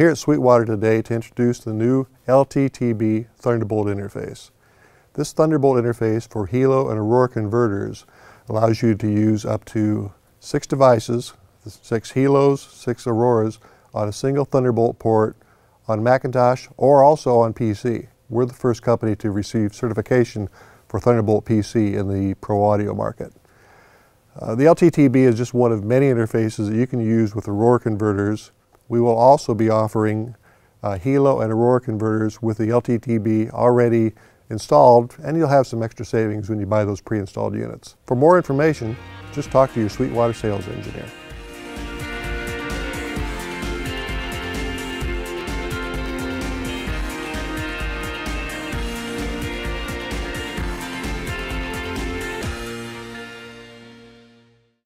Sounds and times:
Speech: 0.0s - 4.5s, 5.2s - 23.4s, 24.3s - 41.1s.

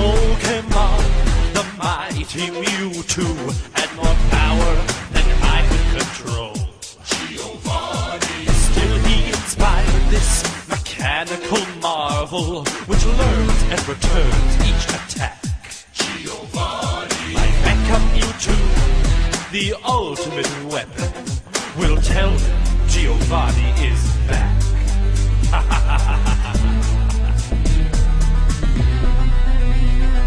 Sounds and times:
Music: 0.0s - 30.2s.

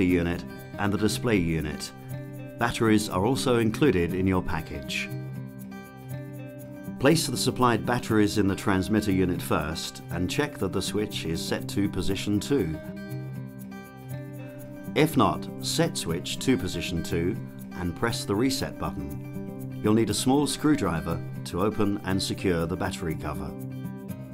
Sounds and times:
Speech: 0.0s - 1.9s, 2.6s - 5.2s, 7.0s - 12.8s, 15.0s - 19.2s, 19.8s - 23.6s
Music: 0.0s - 24.3s.

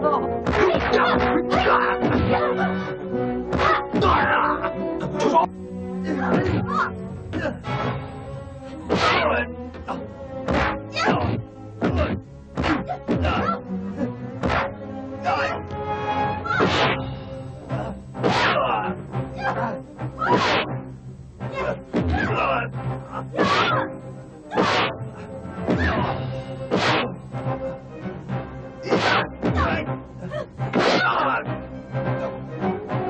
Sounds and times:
Music: 0.0s - 33.1s.

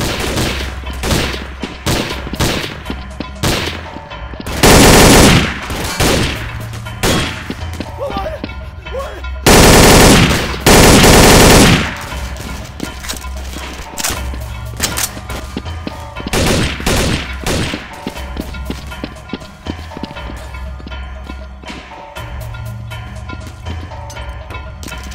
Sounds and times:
Music: 0.0s - 25.1s
Speech: 8.0s - 9.2s.

